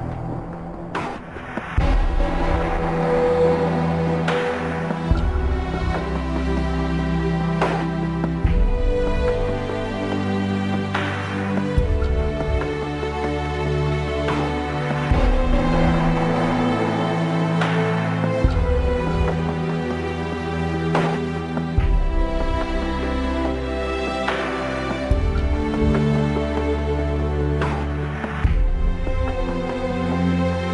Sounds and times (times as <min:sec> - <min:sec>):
Theme music: 0:00.0 - 0:30.7.